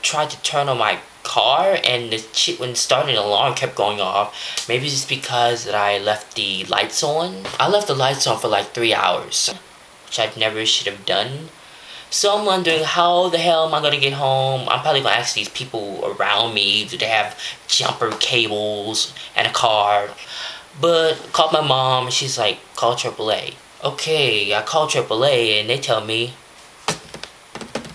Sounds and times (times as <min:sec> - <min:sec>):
Speech: 0:00.0 - 0:26.4.